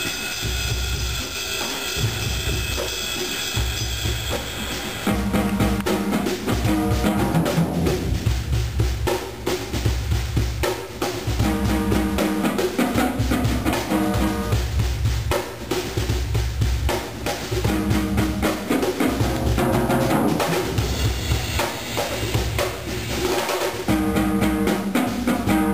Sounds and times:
Drum roll: 0:00.0 - 0:25.7
Bass drum: 0:05.1 - 0:22.9, 0:23.9 - 0:25.7.

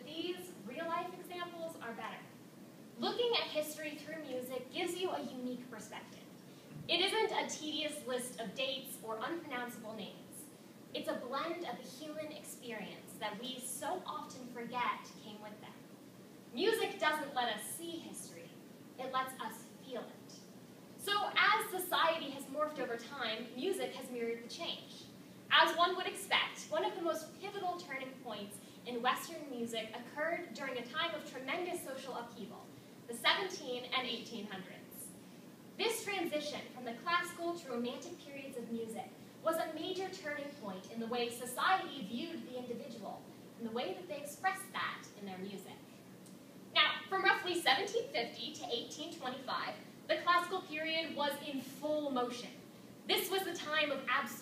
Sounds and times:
Speech: 0:00.0 - 0:02.3, 0:03.0 - 0:15.8, 0:16.5 - 0:35.2, 0:35.8 - 0:46.0, 0:46.7 - 0:54.4.

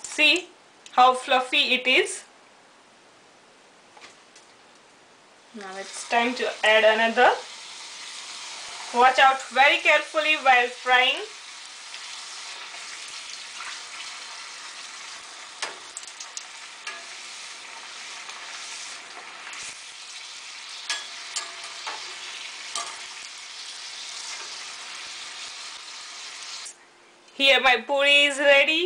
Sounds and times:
Sizzle: 0:05.5 - 0:26.8.

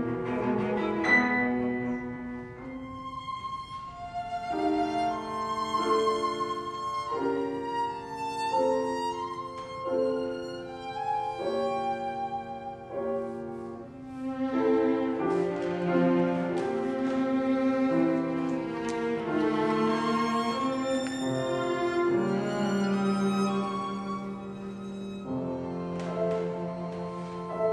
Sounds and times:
Cello: 0:00.0 - 0:27.7
Piano: 0:00.0 - 0:27.7
Violin, fiddle: 0:00.0 - 0:27.7.

